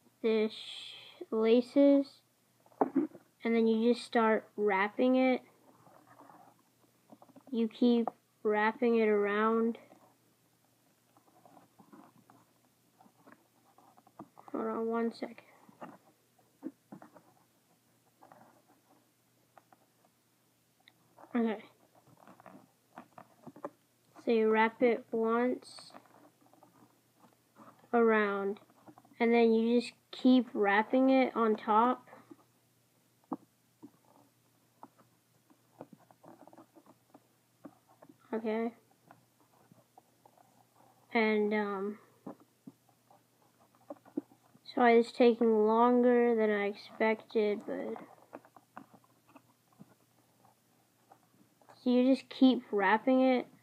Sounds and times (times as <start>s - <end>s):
Speech: 0.2s - 2.2s, 3.4s - 5.5s, 7.5s - 9.8s, 14.5s - 15.5s, 21.3s - 21.7s, 24.2s - 26.0s, 27.9s - 28.6s, 29.2s - 32.2s, 38.3s - 38.8s, 41.1s - 42.0s, 44.7s - 48.1s, 51.8s - 53.6s.